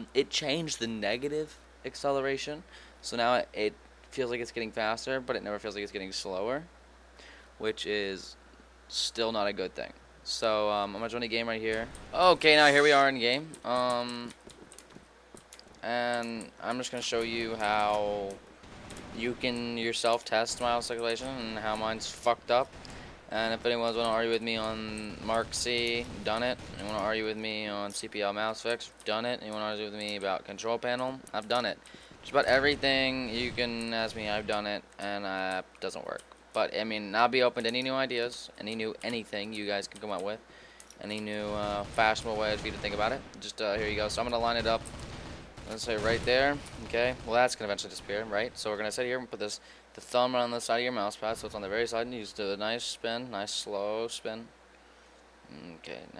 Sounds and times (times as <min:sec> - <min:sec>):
Speech: 0:00.0 - 0:06.7, 0:07.6 - 0:14.4, 0:15.8 - 0:18.4, 0:19.2 - 0:22.7, 0:23.3 - 0:40.4, 0:41.0 - 0:44.8, 0:45.7 - 0:54.5, 0:55.5 - 0:56.2.